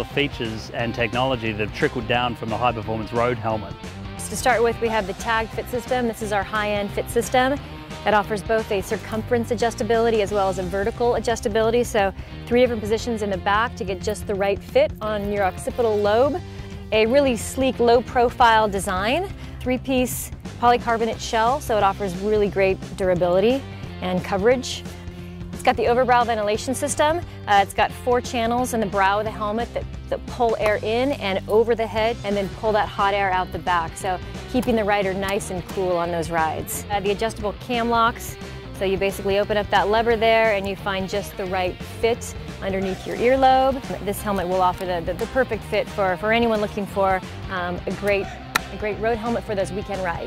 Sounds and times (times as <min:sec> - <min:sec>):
Music: 0:00.0 - 0:50.2.